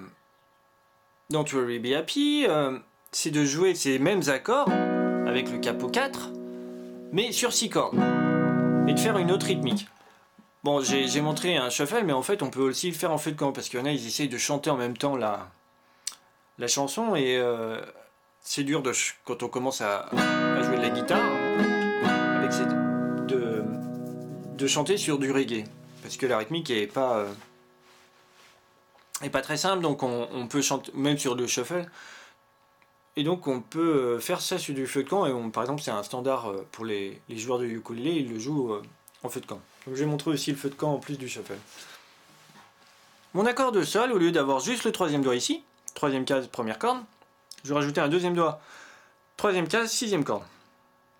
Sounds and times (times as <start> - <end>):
Speech: 0.0 - 0.2, 1.3 - 4.7, 5.3 - 6.3, 7.1 - 8.0, 8.9 - 9.9, 10.6 - 21.5, 22.3 - 23.7, 24.6 - 27.4, 29.2 - 32.0, 33.2 - 41.7, 43.3 - 48.6, 49.4 - 50.6.